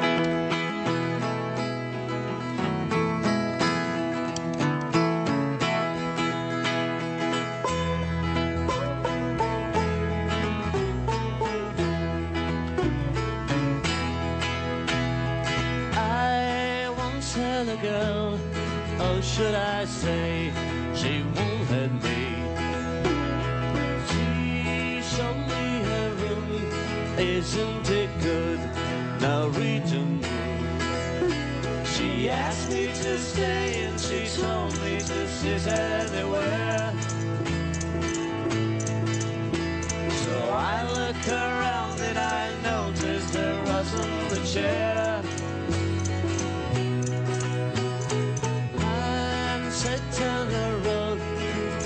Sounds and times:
Music: 0:00.0 - 0:51.8.

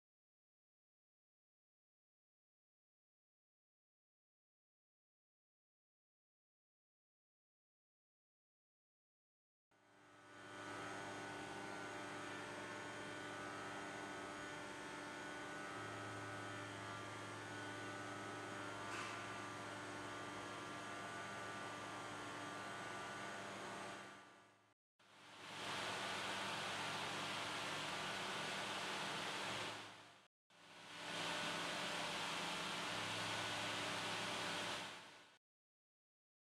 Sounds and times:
Spray: 0:25.4 - 0:30.0.

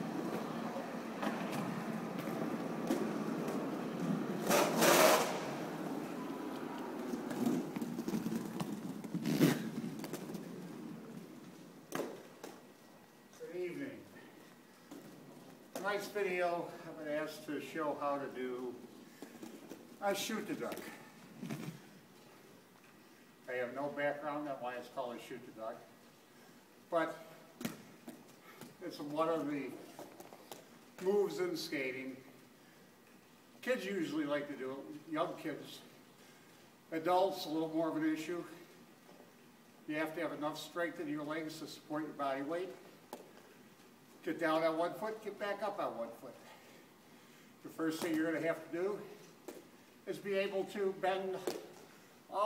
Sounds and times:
Speech: 0:13.4 - 0:14.2, 0:15.8 - 0:18.8, 0:20.0 - 0:21.0, 0:23.5 - 0:25.9, 0:26.9 - 0:27.3, 0:28.8 - 0:29.8, 0:31.0 - 0:32.3, 0:33.6 - 0:35.9, 0:36.9 - 0:38.7, 0:39.9 - 0:42.8, 0:44.2 - 0:46.5, 0:47.6 - 0:49.2, 0:50.1 - 0:51.6.

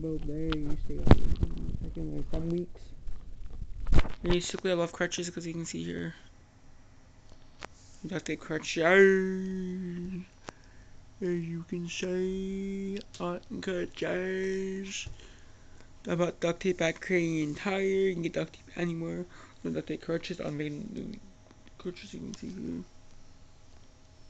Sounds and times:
Speech: 0:00.0 - 0:02.8, 0:04.2 - 0:06.3, 0:08.0 - 0:10.3, 0:11.2 - 0:15.1, 0:16.1 - 0:22.9.

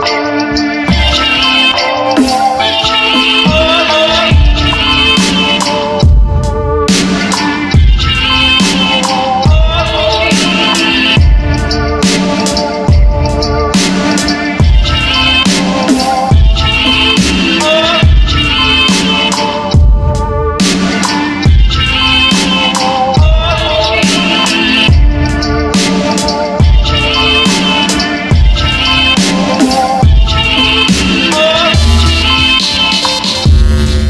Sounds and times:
Dubstep: 0:00.0 - 0:34.0.

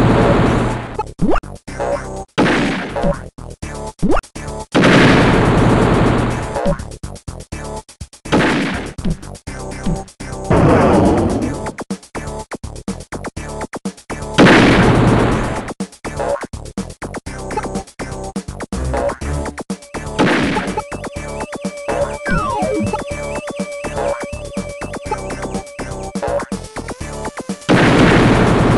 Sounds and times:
Video game music: 0:01.7 - 0:12.4, 0:17.2 - 0:28.7.

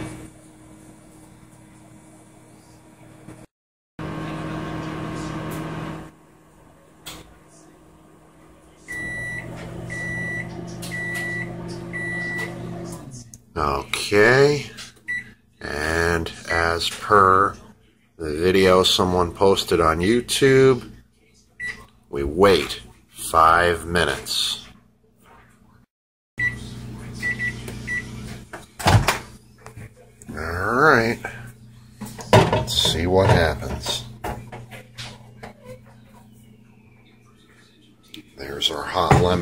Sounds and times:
Microwave oven: 0:00.0 - 0:23.0, 0:26.4 - 0:39.4
Speech: 0:12.6 - 0:14.9, 0:15.6 - 0:25.7, 0:29.6 - 0:31.6, 0:32.2 - 0:34.2, 0:37.4 - 0:39.4.

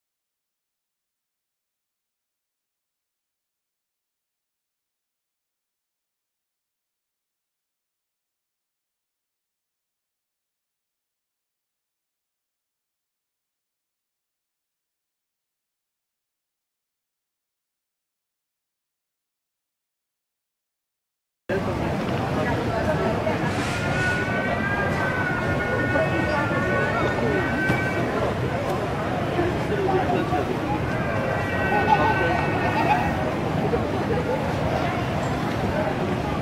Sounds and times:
Speech: 0:21.5 - 0:36.4.

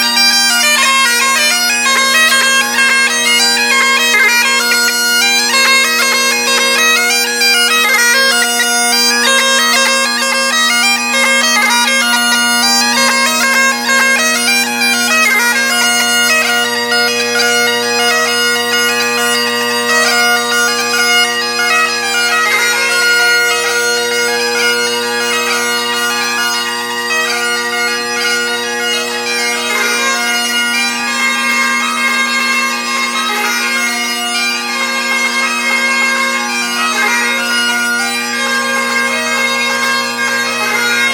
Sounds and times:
Bagpipes: 0:00.0 - 0:41.1.

